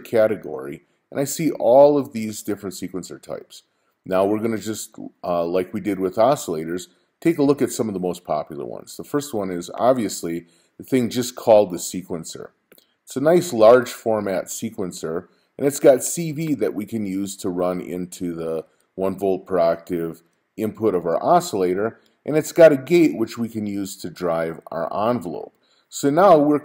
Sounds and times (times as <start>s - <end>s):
Speech: 0.0s - 26.6s.